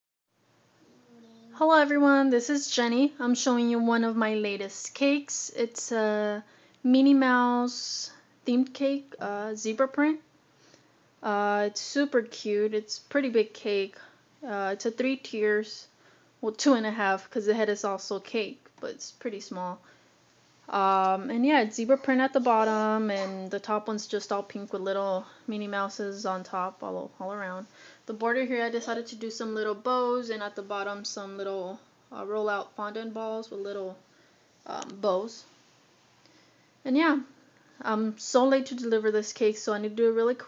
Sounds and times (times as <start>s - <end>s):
Speech: 1.0s - 10.3s, 11.2s - 19.8s, 20.7s - 34.0s, 34.6s - 35.5s, 36.9s - 40.4s.